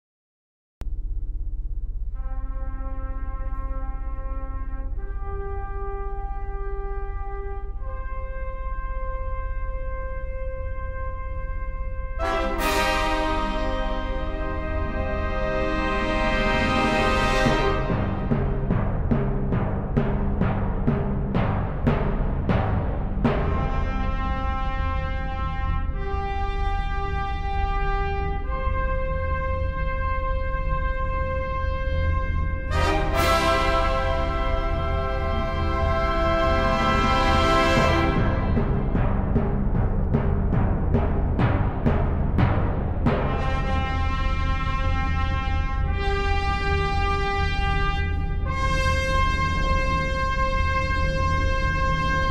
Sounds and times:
Music: 0.8s - 52.3s.

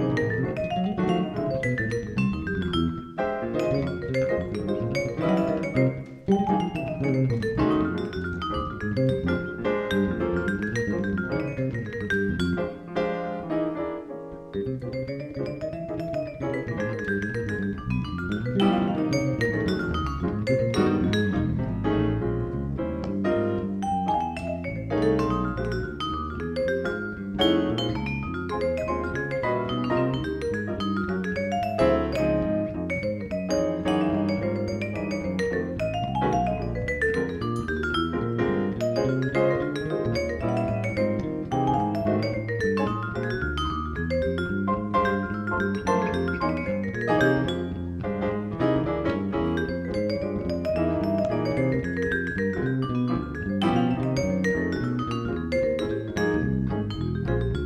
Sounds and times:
Marimba, xylophone: 0.0s - 12.8s, 14.5s - 21.6s, 23.8s - 48.2s, 49.2s - 57.6s
Vibraphone: 0.0s - 12.8s, 14.5s - 21.9s, 23.8s - 48.3s, 49.2s - 57.6s.

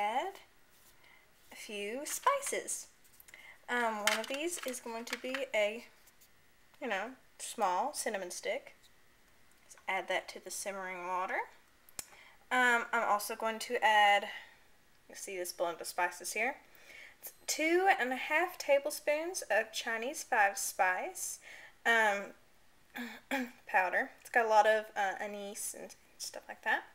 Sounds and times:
Speech: 0.0s - 0.5s, 1.5s - 2.9s, 3.7s - 5.9s, 6.8s - 8.8s, 9.8s - 11.6s, 12.5s - 14.4s, 15.1s - 16.6s, 17.5s - 22.4s, 23.0s - 26.9s
Inside, small room: 0.0s - 26.9s.

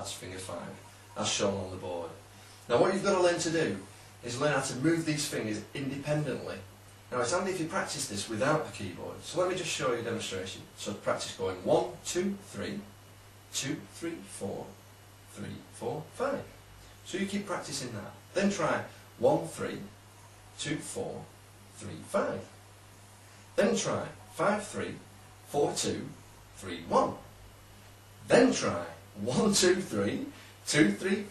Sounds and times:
Speech: 0.0s - 20.0s, 20.6s - 22.6s, 23.6s - 27.4s, 28.2s - 31.3s.

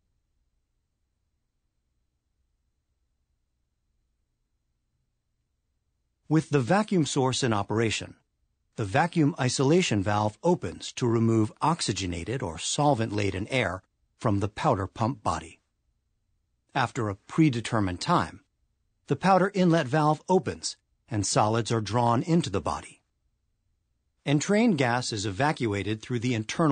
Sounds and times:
Speech: 6.3s - 8.2s, 8.8s - 15.6s, 16.7s - 18.5s, 19.1s - 23.1s, 24.2s - 26.7s.

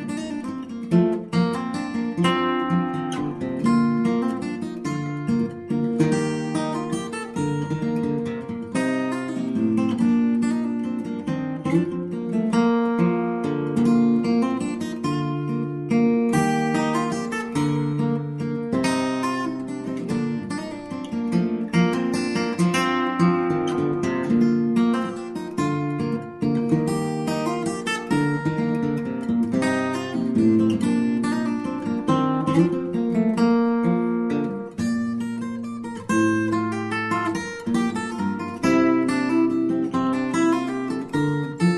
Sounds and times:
Music: 0.0s - 41.7s.

